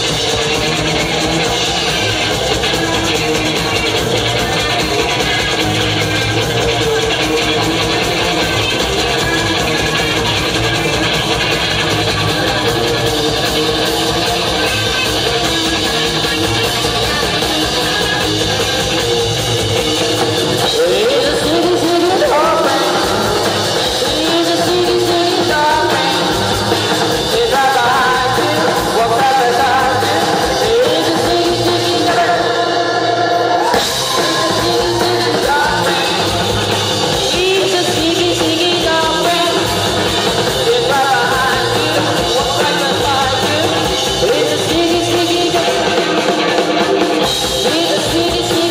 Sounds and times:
Music: 0.0 - 48.7
Singing: 20.6 - 48.7.

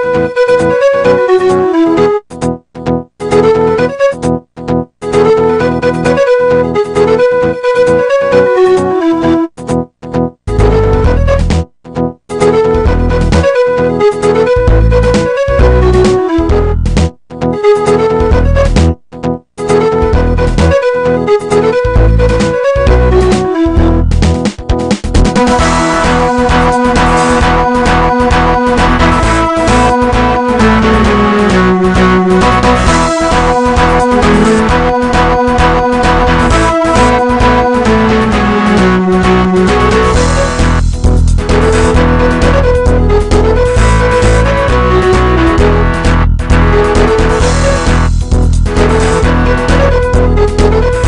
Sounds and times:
Music: 0.0 - 51.0.

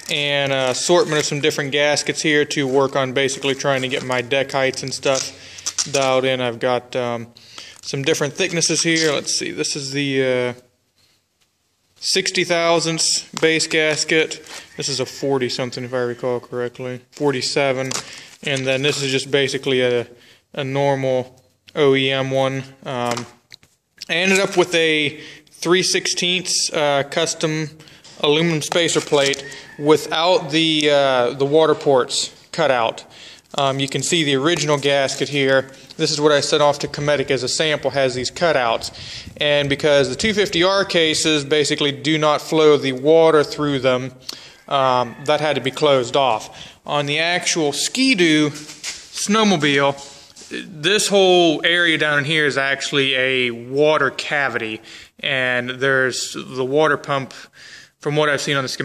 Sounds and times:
Speech: 0.0 - 10.7, 12.0 - 23.4, 24.0 - 58.8.

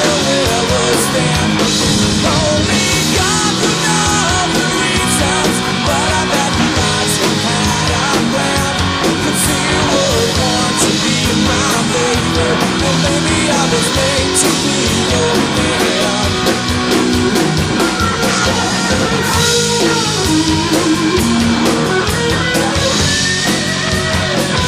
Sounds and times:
Drum: 0.0 - 24.6
Drum kit: 0.0 - 24.6.

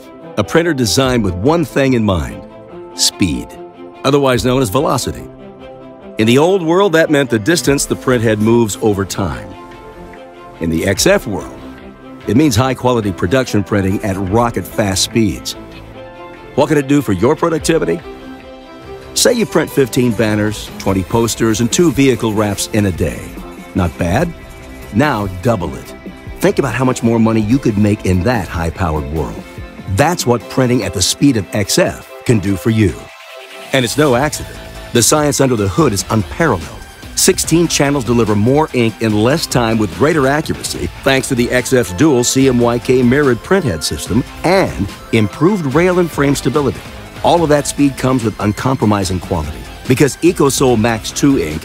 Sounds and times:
Music: 0.0 - 51.6
Speech: 0.4 - 2.4, 3.0 - 5.3, 6.2 - 9.6, 10.6 - 11.6, 12.2 - 15.6, 16.6 - 18.0, 19.2 - 51.6.

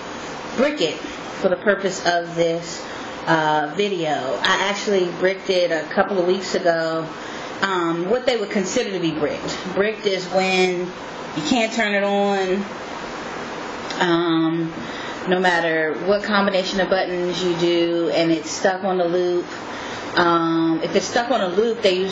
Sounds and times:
Speech: 0.6 - 12.7, 13.9 - 19.6, 20.2 - 22.1.

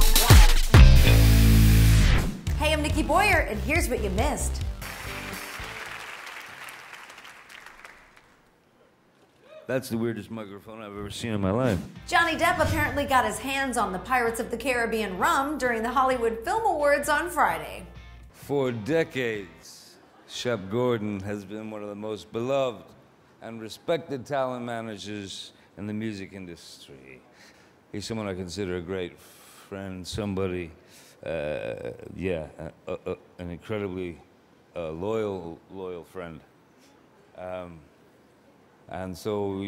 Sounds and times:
Narration, monologue: 9.0 - 38.2
Male speech, man speaking: 9.7 - 11.9, 18.4 - 27.2, 28.0 - 36.5, 37.4 - 37.8, 38.9 - 39.6.

